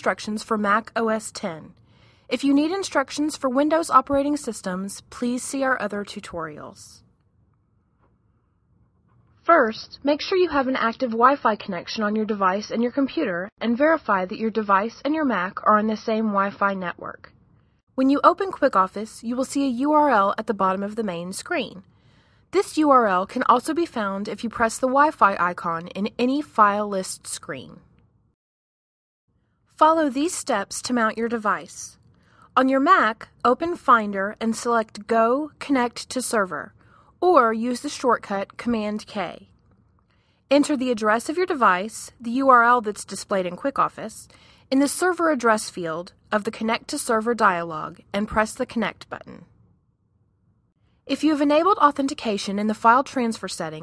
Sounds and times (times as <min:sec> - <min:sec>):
Speech: 0:00.0 - 0:07.0, 0:09.5 - 0:17.3, 0:18.0 - 0:21.8, 0:22.6 - 0:27.9, 0:29.8 - 0:32.0, 0:32.6 - 0:39.5, 0:40.5 - 0:49.4, 0:51.1 - 0:53.8.